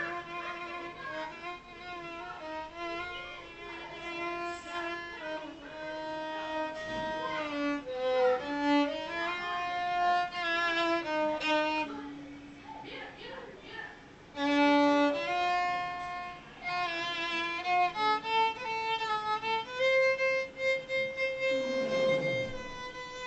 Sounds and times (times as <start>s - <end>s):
Violin, fiddle: 0.0s - 12.6s, 14.3s - 23.2s.